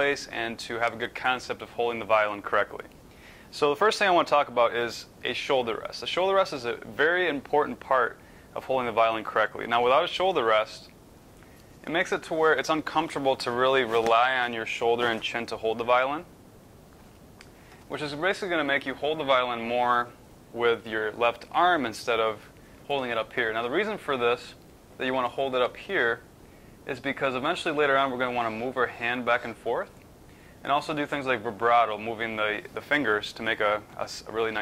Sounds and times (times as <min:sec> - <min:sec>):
Speech: 0:00.0 - 0:02.9, 0:03.5 - 0:10.9, 0:11.8 - 0:16.3, 0:17.9 - 0:30.0, 0:30.6 - 0:34.6.